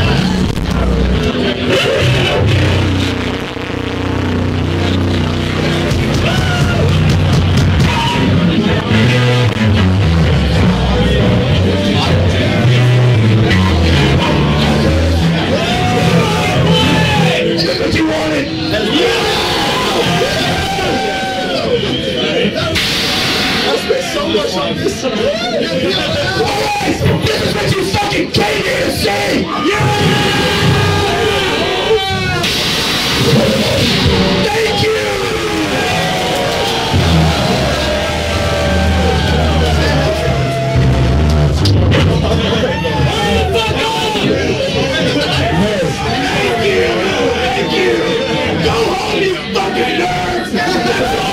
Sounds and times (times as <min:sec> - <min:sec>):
Music: 0:00.0 - 0:24.8, 0:29.5 - 0:51.3
Speech: 0:10.6 - 0:22.8, 0:23.6 - 0:32.5, 0:33.4 - 0:36.1, 0:41.9 - 0:51.3.